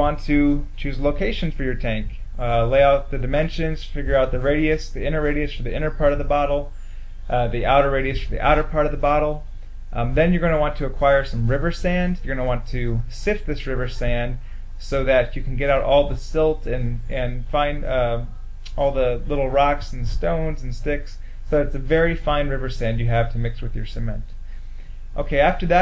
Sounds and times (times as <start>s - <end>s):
Speech: 0.0s - 6.7s, 7.3s - 24.4s, 25.2s - 25.8s.